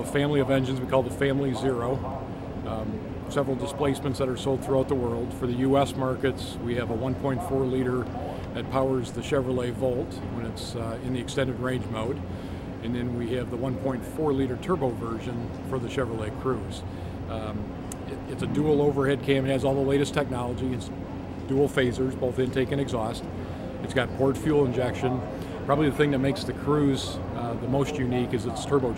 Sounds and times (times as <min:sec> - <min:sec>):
Speech: 0:00.0 - 0:12.2, 0:12.8 - 0:28.9
Heavy engine (low frequency): 0:00.0 - 0:28.9.